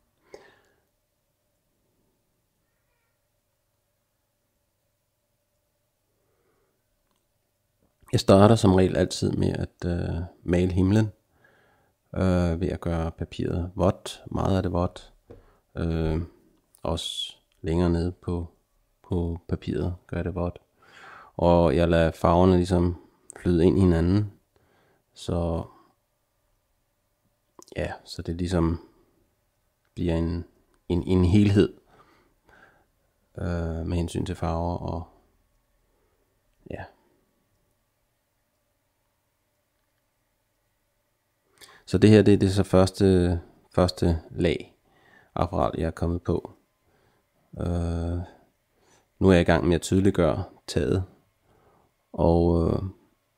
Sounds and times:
Speech: 0:08.1 - 0:11.2, 0:12.1 - 0:15.2, 0:15.8 - 0:20.6, 0:21.4 - 0:24.4, 0:25.2 - 0:25.8, 0:27.6 - 0:28.9, 0:30.0 - 0:31.8, 0:33.4 - 0:35.2, 0:36.6 - 0:37.0, 0:41.9 - 0:44.8, 0:45.4 - 0:46.6, 0:47.6 - 0:48.4, 0:49.2 - 0:51.2, 0:52.1 - 0:53.0.

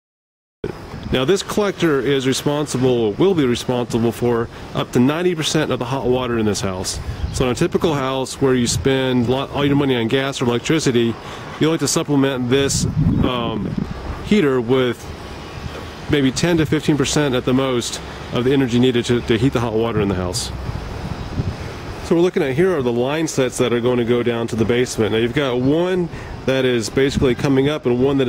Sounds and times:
Speech: 0:01.1 - 0:15.1, 0:16.1 - 0:20.6, 0:22.0 - 0:28.2.

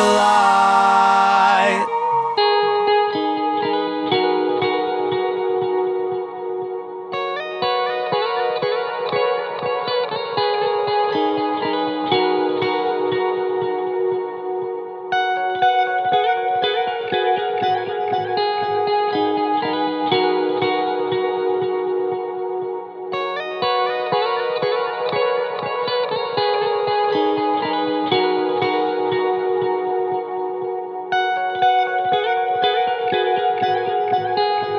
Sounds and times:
Effects unit: 0:00.0 - 0:34.7
Music: 0:00.0 - 0:34.7.

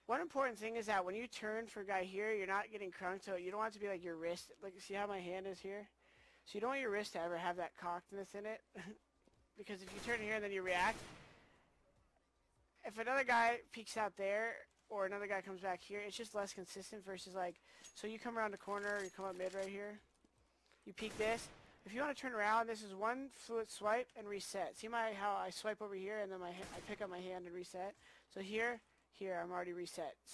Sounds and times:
Speech: 0:00.1 - 0:09.0, 0:09.6 - 0:11.0, 0:12.8 - 0:20.0, 0:20.9 - 0:30.3.

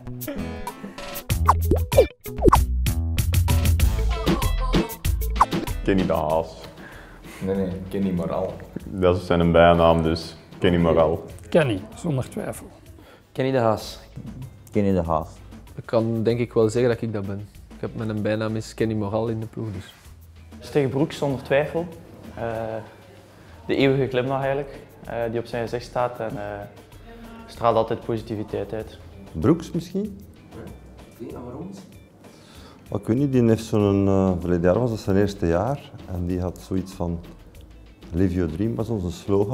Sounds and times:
Music: 0:00.0 - 0:39.5.

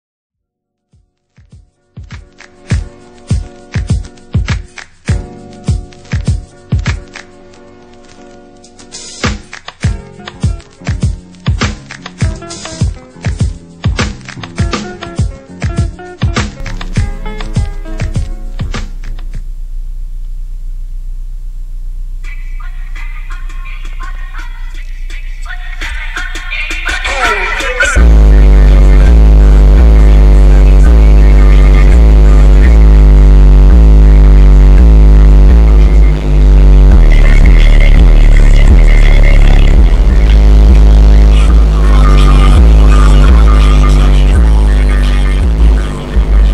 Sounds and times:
Music: 0:00.4 - 0:20.8, 0:21.8 - 0:46.5.

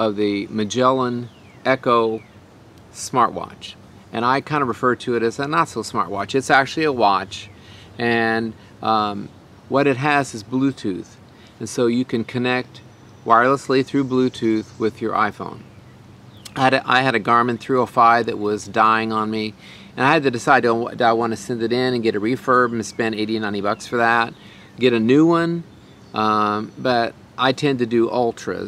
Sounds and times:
Speech: 0:00.0 - 0:02.2, 0:03.0 - 0:15.6, 0:16.5 - 0:28.6.

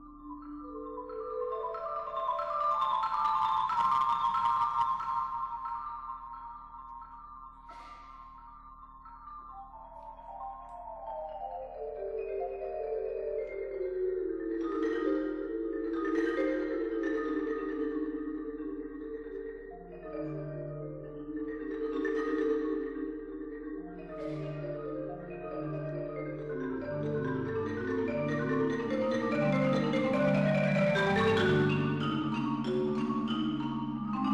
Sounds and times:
Marimba, xylophone: 0:00.0 - 0:34.3
Vibraphone: 0:00.0 - 0:34.3.

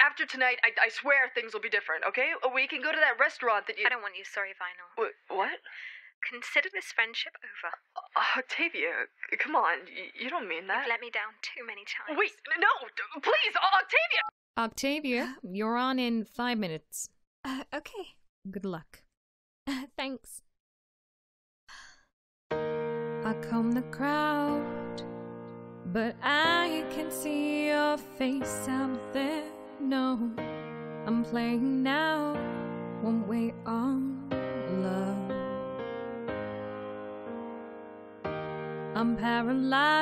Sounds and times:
Speech: 0:00.0 - 0:19.1, 0:19.7 - 0:20.5.

